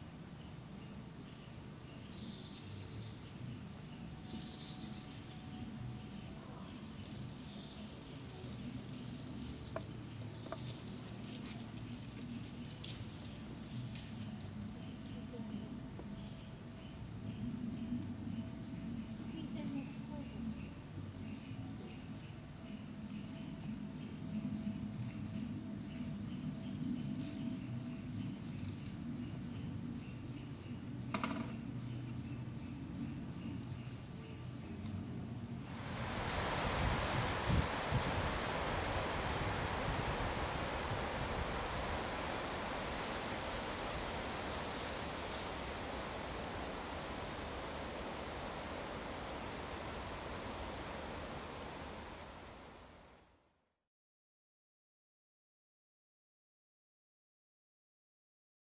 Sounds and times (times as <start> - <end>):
Rustling leaves: 0.0 - 53.4.